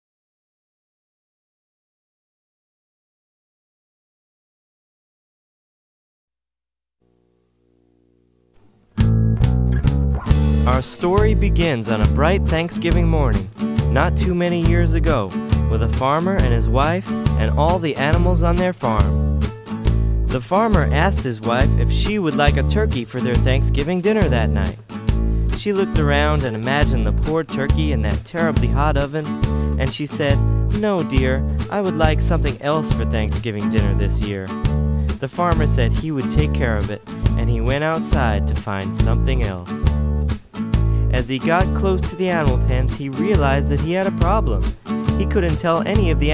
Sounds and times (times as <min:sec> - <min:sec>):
Music: 0:07.0 - 0:46.3
Speech: 0:10.7 - 0:19.2, 0:20.3 - 0:24.8, 0:25.6 - 0:34.5, 0:35.2 - 0:39.8, 0:41.1 - 0:46.3.